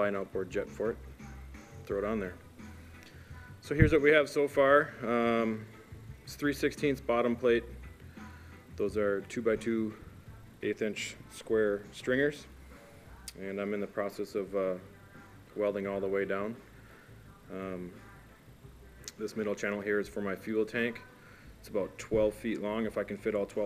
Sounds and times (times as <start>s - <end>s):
Speech: 0.0s - 1.0s, 1.9s - 2.4s, 3.6s - 5.6s, 6.3s - 7.7s, 8.8s - 10.0s, 10.6s - 12.5s, 13.3s - 14.9s, 15.6s - 16.6s, 17.4s - 18.2s, 19.1s - 21.0s, 21.6s - 23.6s
Music: 0.0s - 23.6s.